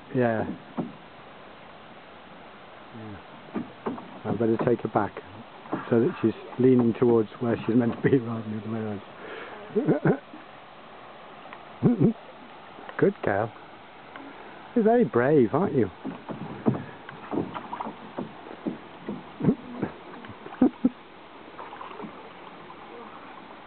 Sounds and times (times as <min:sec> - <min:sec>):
Rowboat, canoe, kayak: 0:00.0 - 0:23.6.